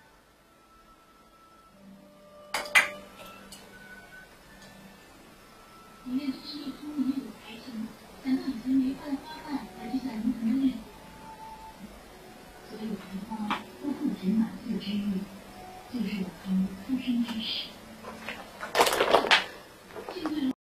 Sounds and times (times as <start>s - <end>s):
Speech: 6.1s - 10.9s, 12.7s - 15.3s, 15.9s - 17.8s, 20.0s - 20.6s.